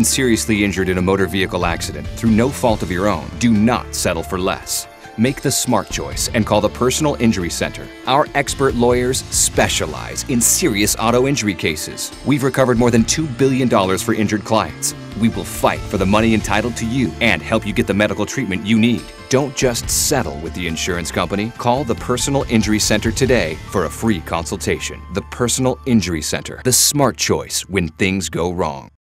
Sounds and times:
Music: 0.0 - 29.0
Speech: 0.0 - 29.0.

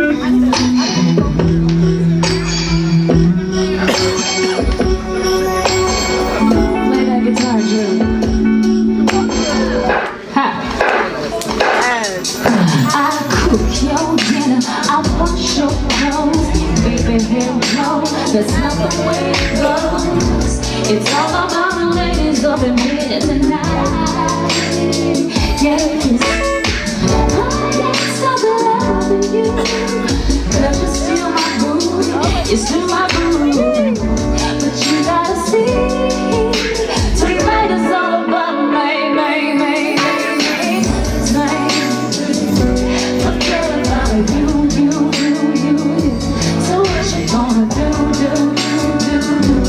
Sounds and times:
Music: 0.0 - 49.6.

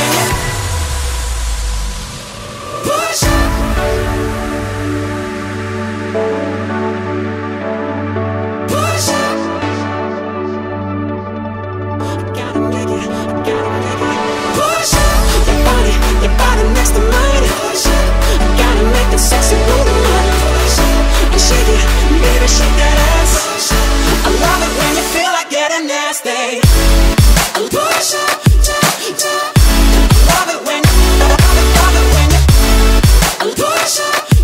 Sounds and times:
Electronica: 0.0 - 34.4
Pop music: 0.0 - 34.4.

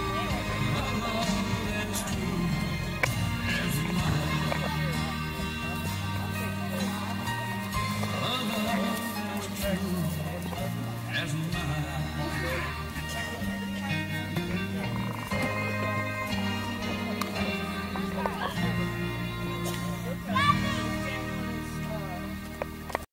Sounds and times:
Wedding music: 0.0 - 23.1
Speech: 3.5 - 22.6.

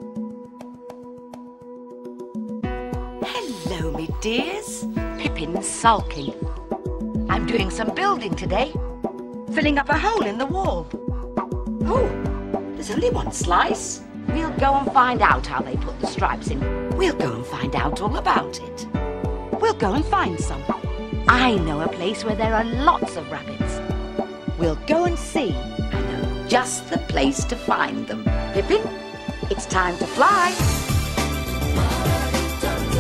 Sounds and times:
Music: 0.0 - 33.0
Speech: 3.2 - 6.4, 7.3 - 8.8, 9.5 - 11.0, 11.8 - 12.2, 12.8 - 18.8, 19.6 - 23.8, 24.6 - 30.6.

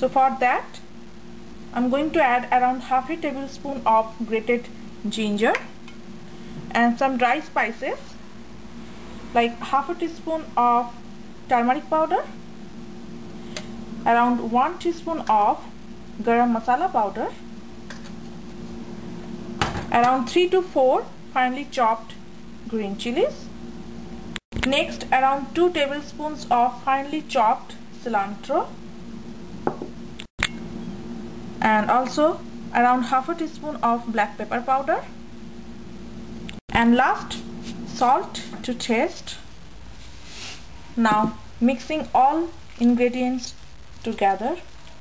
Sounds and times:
Speech: 0.0 - 0.9, 1.8 - 5.7, 6.7 - 8.2, 9.4 - 12.4, 14.1 - 17.4, 19.9 - 23.5, 24.6 - 28.8, 31.6 - 35.1, 36.7 - 39.5, 41.0 - 44.7.

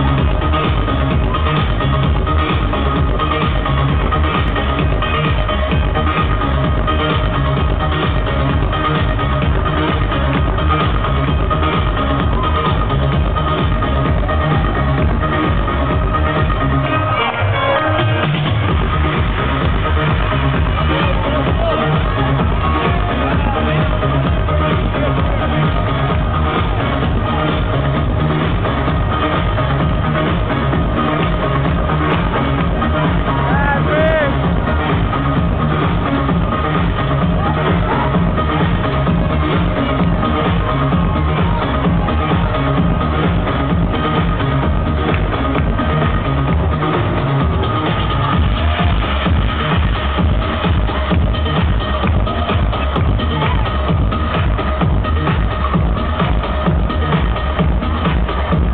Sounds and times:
Electronica: 0.0 - 58.7
Speech: 20.6 - 25.8, 33.3 - 34.4.

